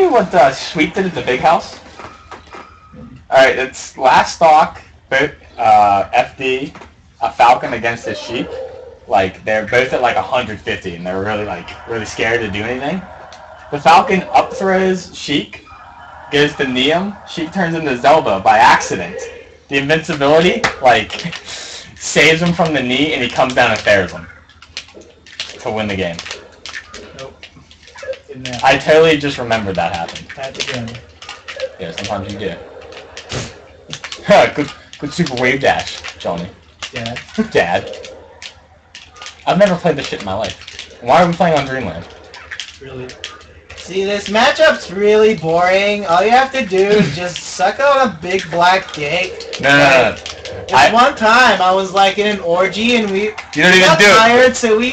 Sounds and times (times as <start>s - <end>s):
Speech: 0.0s - 1.8s, 3.0s - 15.7s, 16.3s - 24.3s, 25.6s - 26.3s, 28.1s - 31.0s, 31.6s - 32.6s, 33.4s - 38.0s, 39.5s - 42.1s, 42.8s - 54.9s.